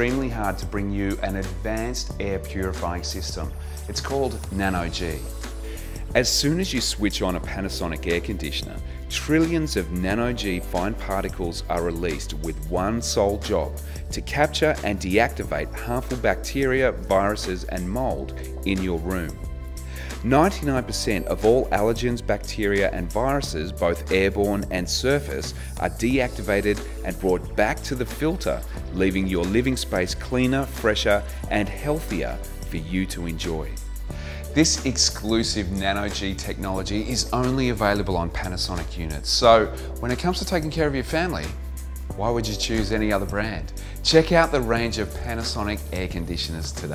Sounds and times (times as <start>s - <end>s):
Speech: 0.0s - 5.3s, 6.1s - 19.4s, 20.1s - 33.8s, 34.5s - 46.9s
Music: 0.0s - 46.9s.